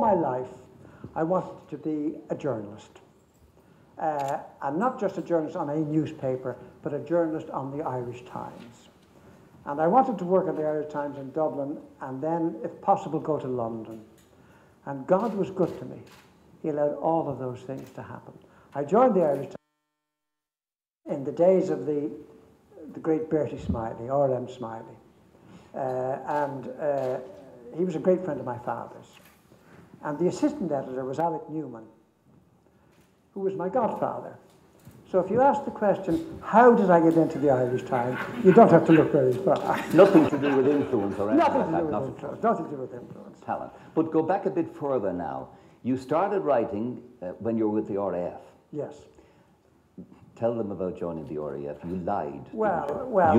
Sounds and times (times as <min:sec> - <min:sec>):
Speech: 0:00.0 - 0:00.6, 0:01.2 - 0:03.0, 0:04.0 - 0:08.9, 0:09.6 - 0:14.1, 0:14.9 - 0:19.6, 0:21.1 - 0:22.2, 0:22.8 - 0:25.0, 0:25.8 - 0:29.2, 0:30.0 - 0:32.0, 0:33.4 - 0:34.4, 0:35.1 - 0:49.1, 0:50.0 - 0:53.3.